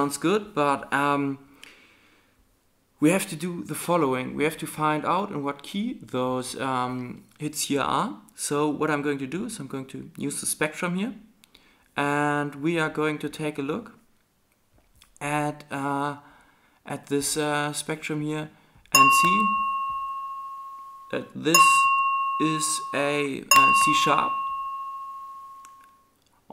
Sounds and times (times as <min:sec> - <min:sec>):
Speech: 0:00.0 - 0:01.5, 0:03.0 - 0:11.3, 0:12.0 - 0:14.0, 0:15.2 - 0:16.2, 0:16.9 - 0:19.6, 0:21.1 - 0:24.4
Bell: 0:19.0 - 0:26.1.